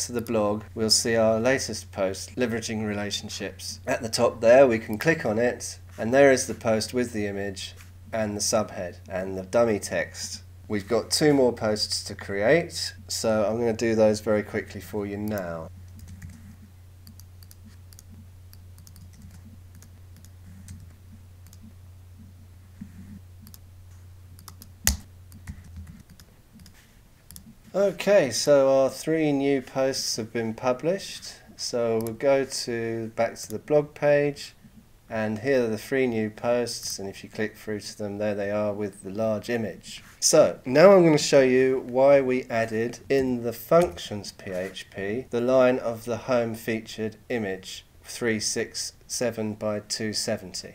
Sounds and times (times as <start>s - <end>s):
Speech: 0.0s - 15.7s, 27.7s - 50.7s
Inside, small room: 0.0s - 50.7s
Clicking: 17.0s - 20.8s, 21.4s - 21.6s, 23.4s - 23.6s, 24.4s - 25.4s.